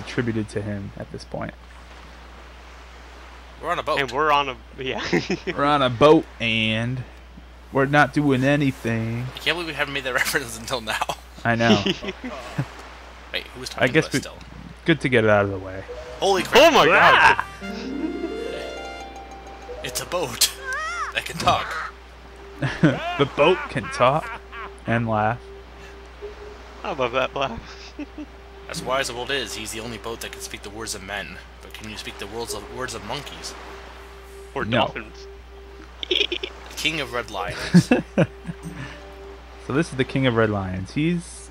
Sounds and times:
Speech: 0:00.0 - 0:01.6, 0:03.6 - 0:07.1, 0:07.8 - 0:12.6, 0:13.4 - 0:17.4, 0:19.8 - 0:20.6, 0:21.2 - 0:21.8, 0:23.2 - 0:24.3, 0:24.9 - 0:25.4, 0:28.7 - 0:33.5, 0:34.6 - 0:35.2, 0:36.7 - 0:37.9, 0:39.7 - 0:41.5.

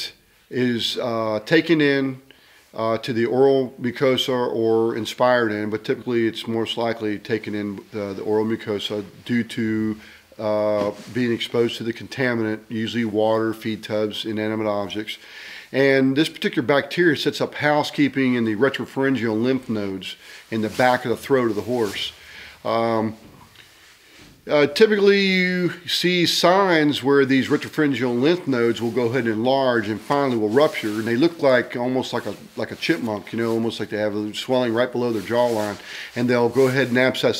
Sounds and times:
Speech: 0:00.0 - 0:23.3, 0:24.4 - 0:37.3.

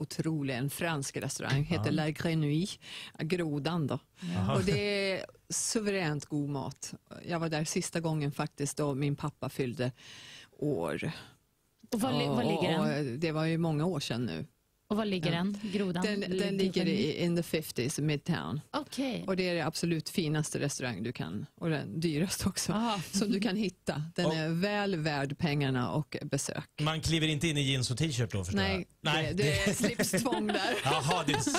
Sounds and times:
Speech: 0:00.0 - 0:02.7, 0:04.2 - 0:09.3, 0:12.0 - 0:31.5.

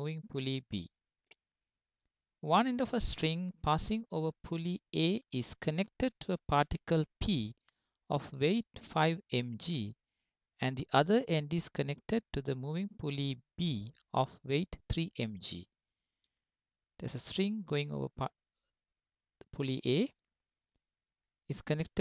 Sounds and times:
Speech: 0:00.0 - 0:01.0, 0:02.4 - 0:10.0, 0:10.6 - 0:15.7, 0:17.0 - 0:18.4, 0:19.4 - 0:20.2, 0:21.5 - 0:22.0.

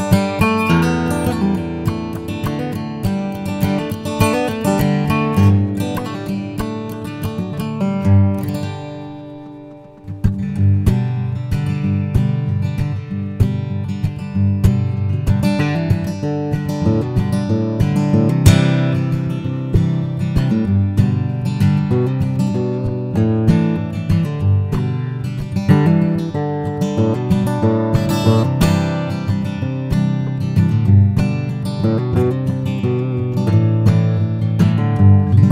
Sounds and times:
Acoustic guitar: 0:00.0 - 0:35.5
Strum: 0:00.0 - 0:35.5.

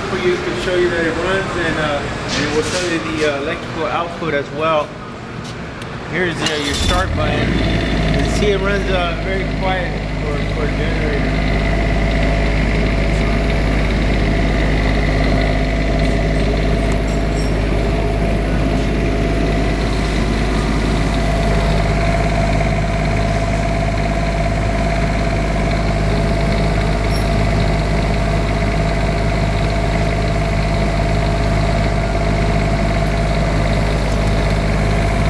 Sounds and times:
Medium engine (mid frequency): 0:00.0 - 0:35.2
Idling: 0:06.5 - 0:35.2.

